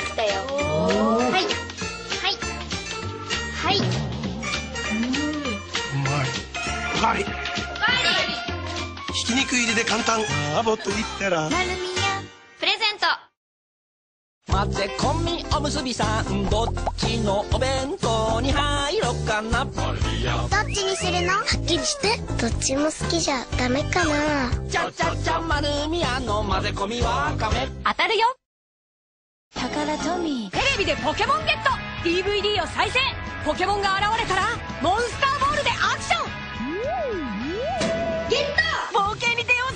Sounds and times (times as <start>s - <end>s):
Music: 0.0s - 13.2s, 14.5s - 28.1s, 29.5s - 39.7s.